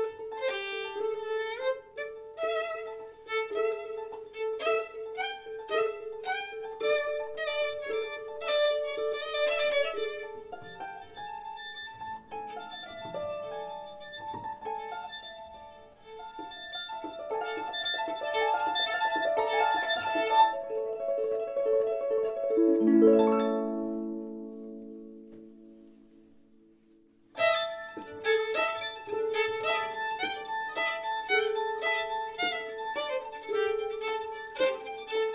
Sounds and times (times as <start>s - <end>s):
Harp: 0.0s - 35.3s
Pizzicato: 0.0s - 35.3s.